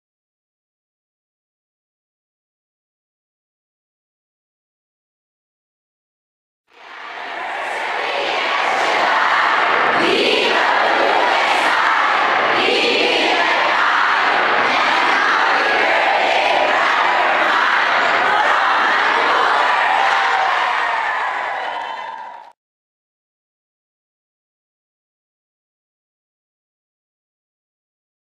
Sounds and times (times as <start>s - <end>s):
Inside, large room or hall: 6.7s - 22.6s.